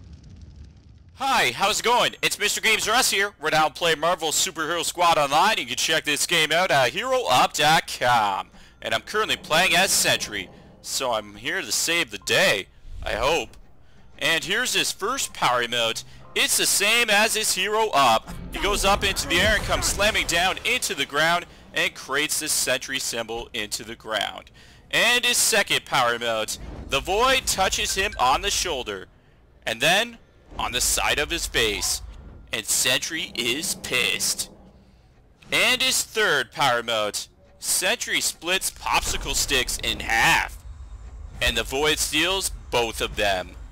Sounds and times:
Speech: 1.2s - 13.6s, 14.2s - 34.5s, 35.4s - 40.6s, 41.4s - 43.6s.

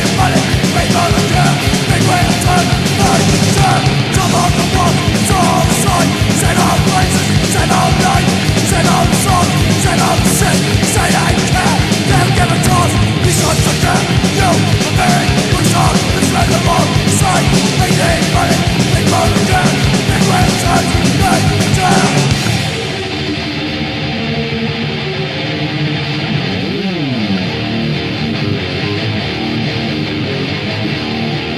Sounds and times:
Music: 0.0s - 31.5s.

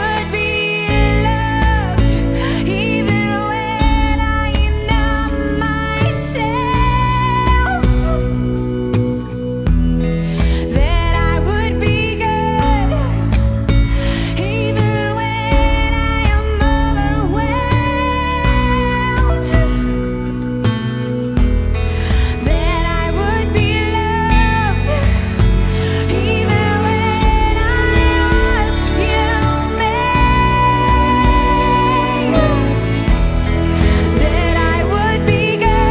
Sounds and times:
Independent music: 0.0s - 35.9s.

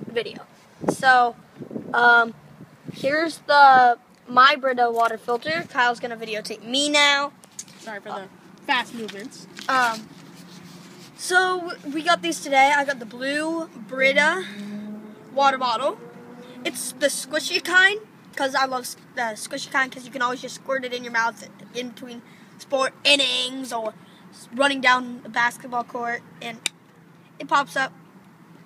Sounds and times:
Child speech, kid speaking: 0.0s - 1.4s, 2.0s - 2.4s, 3.0s - 10.1s, 11.2s - 14.7s, 15.3s - 16.0s, 16.6s - 26.7s, 27.4s - 28.0s.

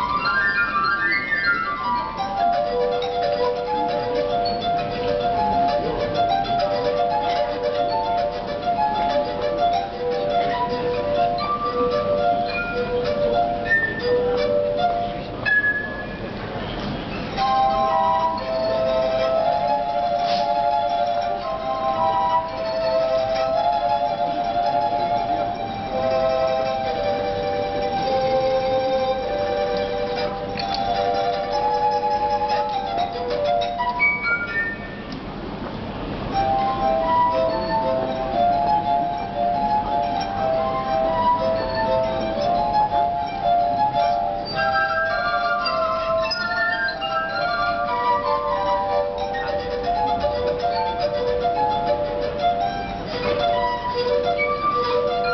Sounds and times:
Music: 0.0s - 55.3s.

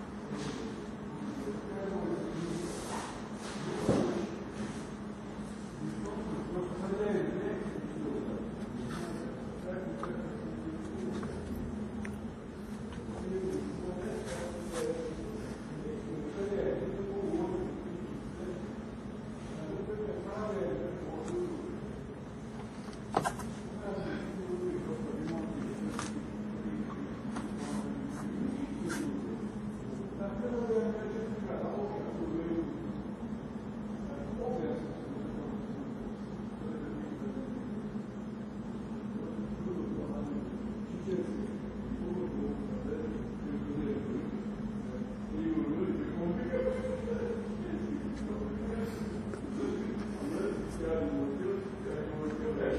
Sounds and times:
Speech: 0.0s - 52.7s.

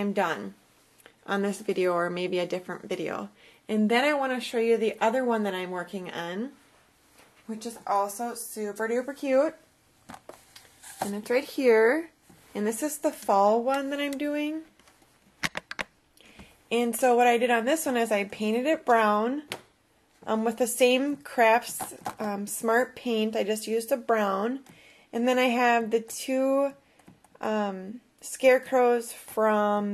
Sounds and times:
Speech: 0.0s - 0.6s, 1.3s - 6.6s, 7.5s - 9.6s, 11.0s - 14.7s, 16.7s - 19.5s, 20.2s - 24.6s, 25.2s - 26.8s, 27.4s - 29.9s
Inside, small room: 0.0s - 29.9s.

